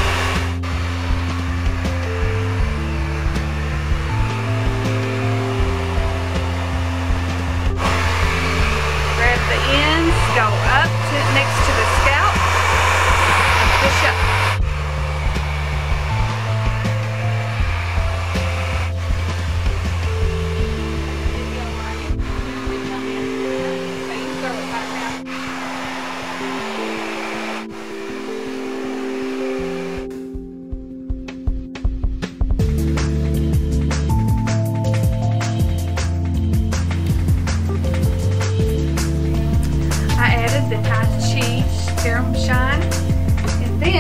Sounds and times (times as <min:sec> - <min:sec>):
Music: 0:00.0 - 0:44.0
Speech: 0:09.2 - 0:12.4, 0:13.8 - 0:14.2, 0:40.2 - 0:42.8, 0:43.7 - 0:44.0.